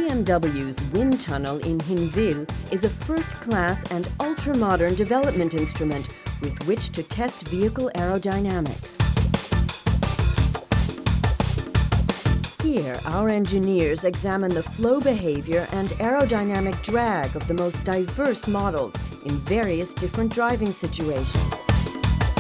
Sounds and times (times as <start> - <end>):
Speech: 0.0 - 9.0, 12.6 - 21.8
Music: 0.0 - 22.4.